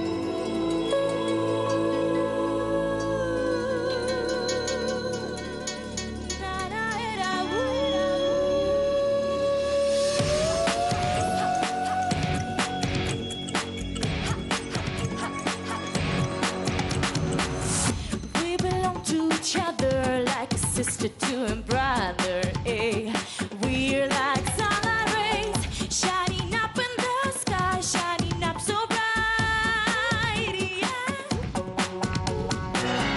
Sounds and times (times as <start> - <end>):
Music: 0.0 - 33.1.